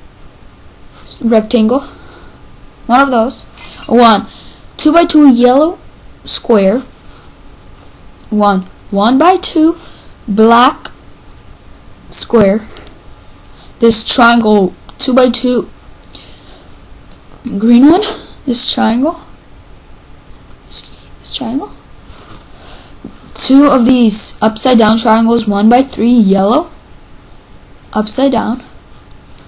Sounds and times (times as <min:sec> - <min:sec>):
Speech: 0:01.1 - 0:01.9, 0:02.9 - 0:06.9, 0:08.3 - 0:11.0, 0:12.1 - 0:12.7, 0:13.8 - 0:15.7, 0:17.5 - 0:19.3, 0:20.7 - 0:21.8, 0:23.4 - 0:26.8, 0:27.9 - 0:28.7.